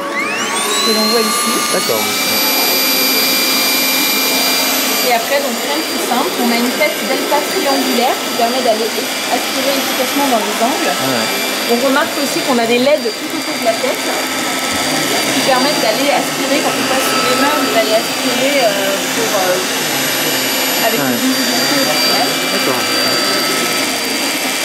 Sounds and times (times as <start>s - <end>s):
Vacuum cleaner: 0.0s - 24.6s.